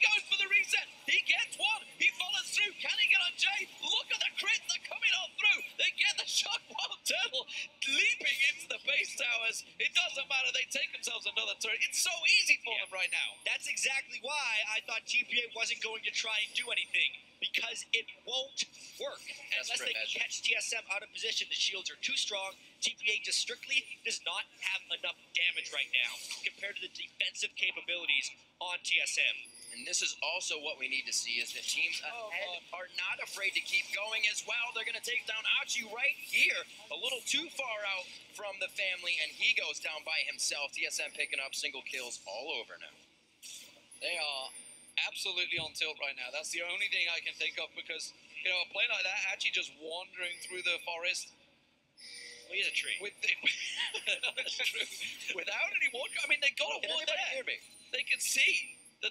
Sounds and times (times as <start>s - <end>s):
Speech: 0.0s - 43.0s, 44.0s - 51.3s, 52.5s - 59.1s.